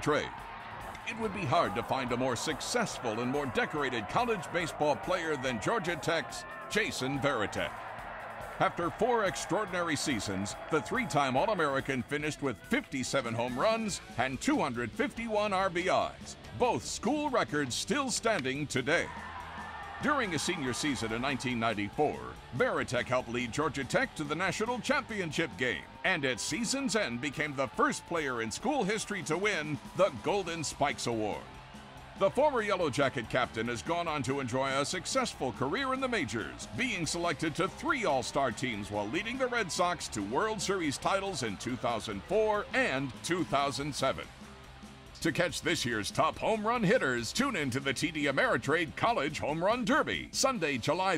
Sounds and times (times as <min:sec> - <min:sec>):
Speech: 0:00.0 - 0:00.4, 0:01.0 - 0:07.8, 0:08.6 - 0:19.2, 0:20.0 - 0:31.5, 0:32.2 - 0:44.3, 0:45.2 - 0:51.1.